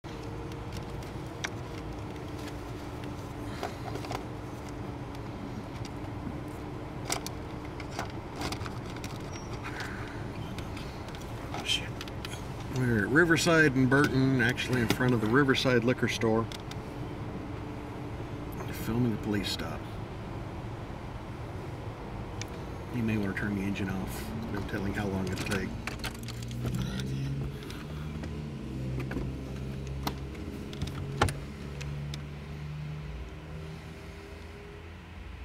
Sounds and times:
Vehicle: 0.0 - 35.4.

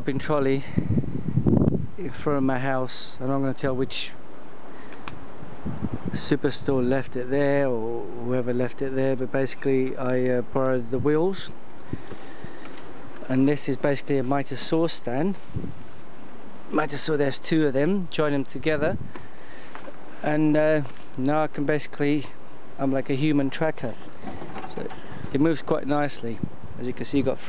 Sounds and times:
Speech: 0.0 - 0.8, 2.0 - 4.2, 6.1 - 11.6, 13.2 - 15.4, 16.7 - 19.0, 20.2 - 24.0, 24.6 - 27.4.

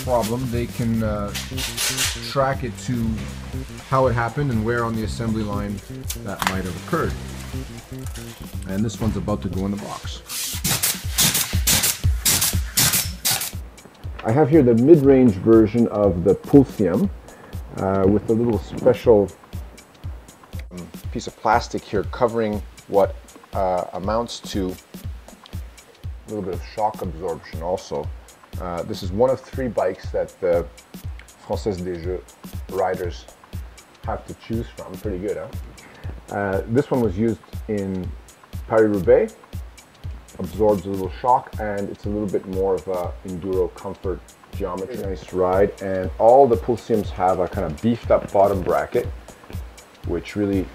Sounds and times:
Speech: 0.0 - 1.5, 2.2 - 3.3, 3.9 - 7.2, 8.6 - 10.2, 14.2 - 17.1, 17.7 - 19.4, 20.6 - 24.8, 26.3 - 30.7, 31.4 - 33.3, 34.0 - 35.6, 36.3 - 38.1, 38.7 - 39.4, 40.4 - 49.1, 50.0 - 50.7
Music: 0.0 - 50.7.

